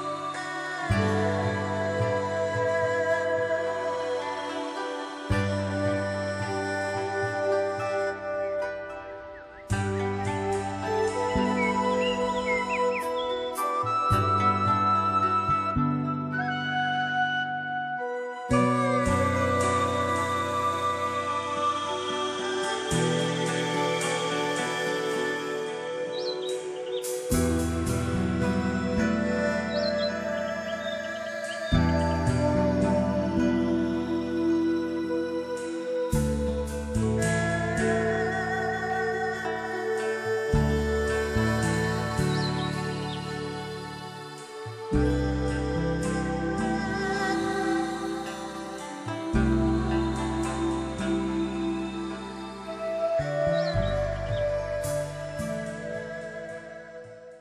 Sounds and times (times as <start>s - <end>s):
Music: 0.0s - 57.4s
Outside, rural or natural: 0.0s - 57.4s.